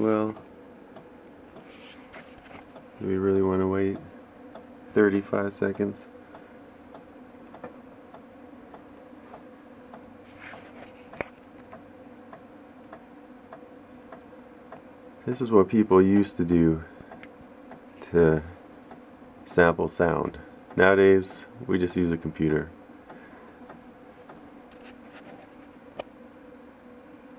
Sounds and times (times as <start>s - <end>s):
Speech: 0.0s - 0.4s, 3.0s - 4.1s, 4.9s - 6.1s, 15.2s - 16.9s, 18.0s - 18.6s, 19.5s - 22.8s.